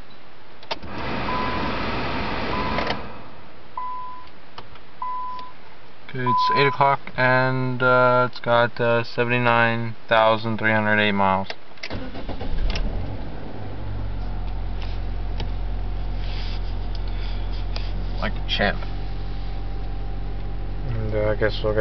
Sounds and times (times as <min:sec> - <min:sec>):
Car: 0:00.6 - 0:05.5, 0:11.8 - 0:21.8
Speech: 0:06.1 - 0:11.6, 0:18.2 - 0:18.9, 0:20.8 - 0:21.8.